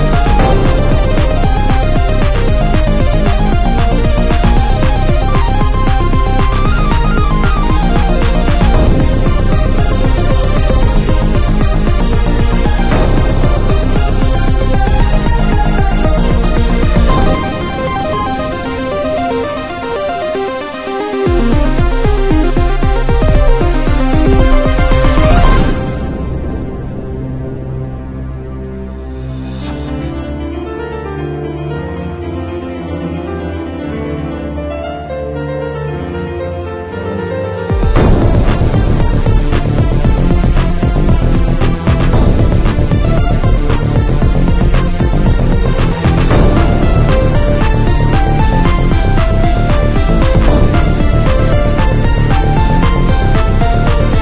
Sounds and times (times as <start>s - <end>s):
Video game music: 0.0s - 54.2s.